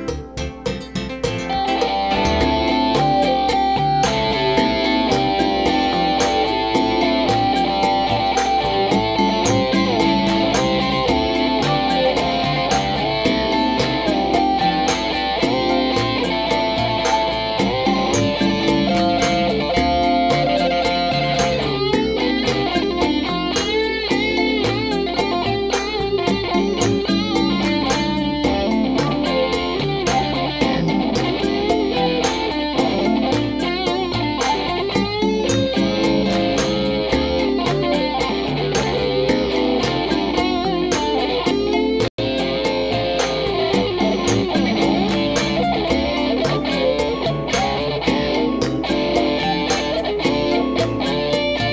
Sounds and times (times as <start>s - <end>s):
Electric guitar: 0.0s - 51.7s.